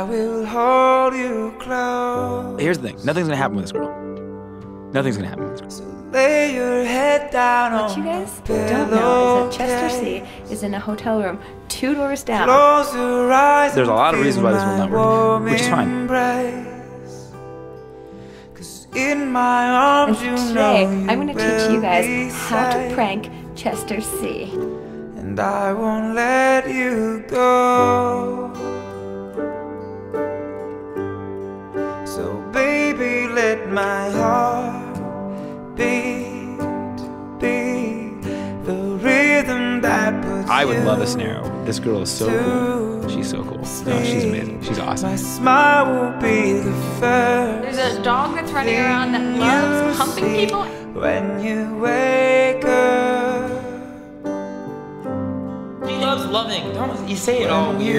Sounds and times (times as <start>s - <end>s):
Music: 0.0s - 57.9s
Speech: 2.6s - 3.9s, 5.0s - 5.8s, 7.8s - 12.6s, 13.7s - 16.0s, 20.1s - 24.5s, 40.4s - 45.2s, 47.6s - 50.8s, 55.9s - 57.9s.